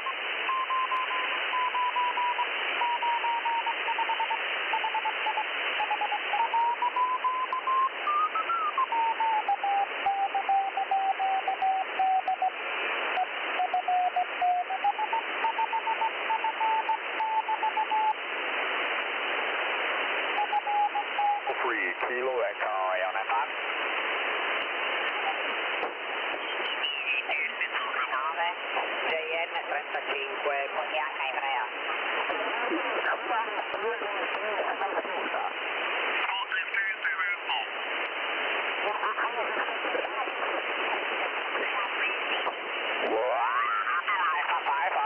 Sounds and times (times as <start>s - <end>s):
Speech: 21.5s - 23.5s, 26.7s - 31.7s, 32.3s - 35.5s, 38.8s - 40.4s, 43.1s - 45.0s.